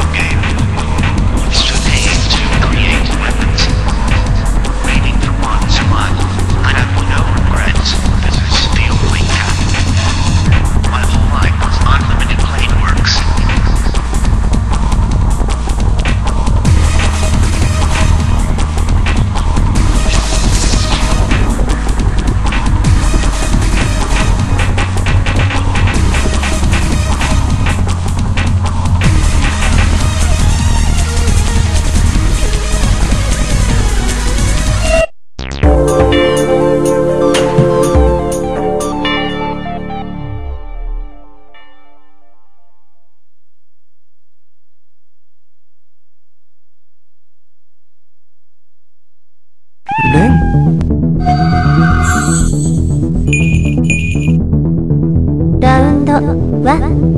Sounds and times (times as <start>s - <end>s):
Music: 0.0s - 43.5s, 49.9s - 57.1s
Speech: 0.1s - 0.6s, 1.5s - 10.0s, 10.8s - 14.0s, 50.0s - 50.4s, 55.6s - 57.0s.